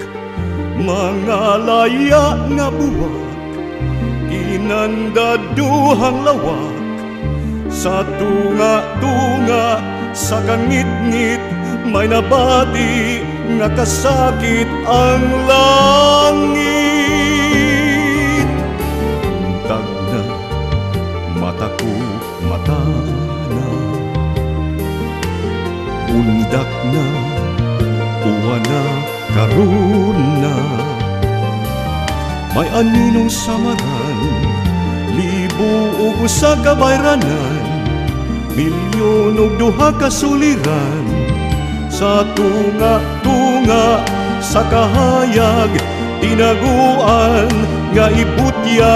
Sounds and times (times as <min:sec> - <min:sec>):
Music: 0:00.0 - 0:48.9.